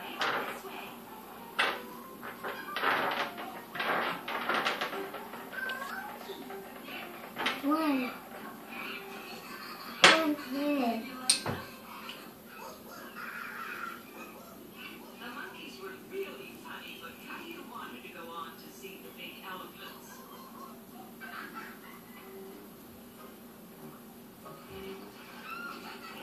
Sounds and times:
Speech: 15.1s - 20.2s.

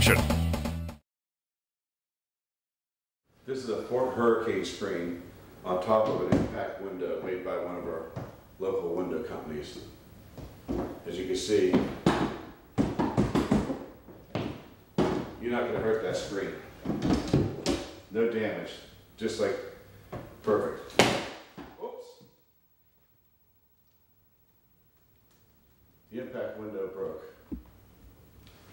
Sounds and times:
Speech: 0.0s - 0.2s, 3.5s - 10.0s, 11.0s - 11.9s, 15.4s - 16.6s, 18.1s - 19.8s, 20.4s - 20.9s, 21.8s - 22.3s, 26.1s - 27.4s
Music: 0.0s - 1.0s.

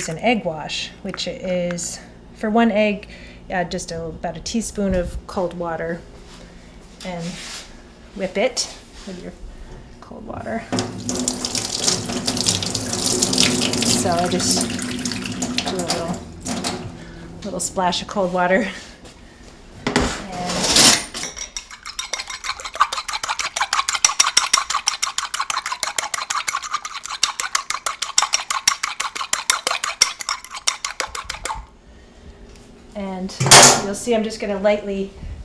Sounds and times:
Water tap, faucet: 10.8s - 16.7s
Water: 11.0s - 16.0s, 22.1s - 30.2s.

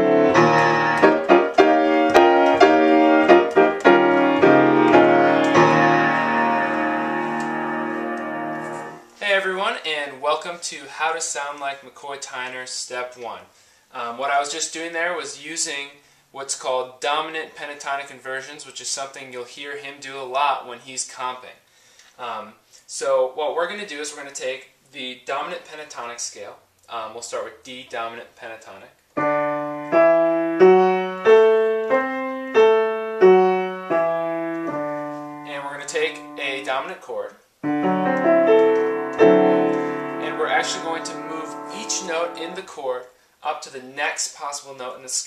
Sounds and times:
Music: 0.0s - 9.1s, 29.2s - 36.7s, 37.6s - 42.6s
Speech: 9.2s - 21.6s, 22.2s - 29.0s, 35.5s - 37.4s, 40.2s - 45.2s.

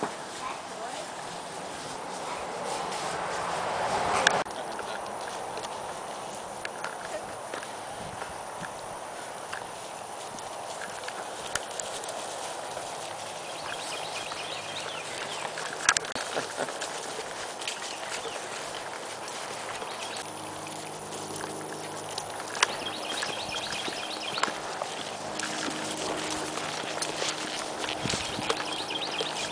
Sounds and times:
Clip-clop: 0.0s - 29.5s.

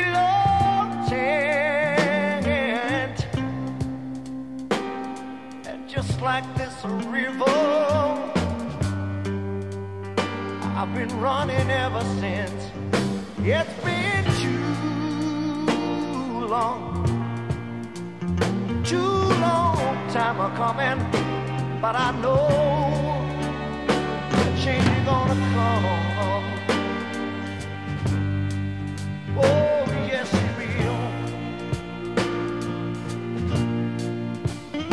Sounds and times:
Music: 0.0s - 34.9s.

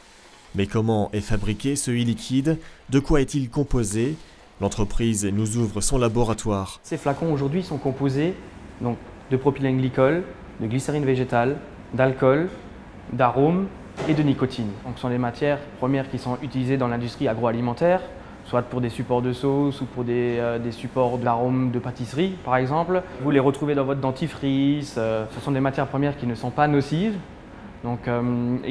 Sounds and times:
Speech: 0.6s - 28.7s.

